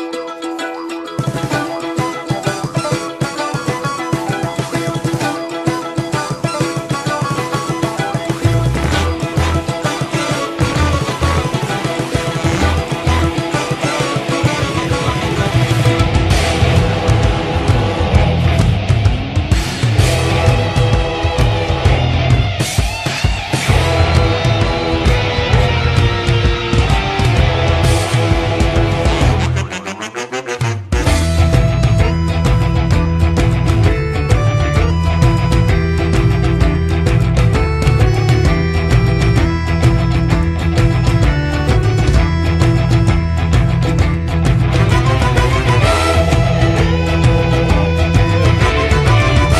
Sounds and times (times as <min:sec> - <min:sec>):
Rock music: 0:00.0 - 0:49.5.